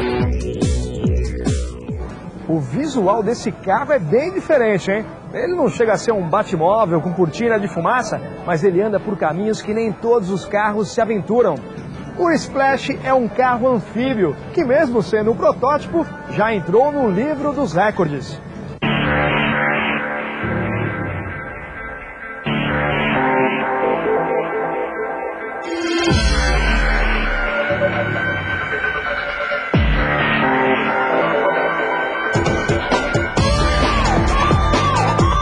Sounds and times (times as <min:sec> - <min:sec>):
Music: 0:00.0 - 0:35.4.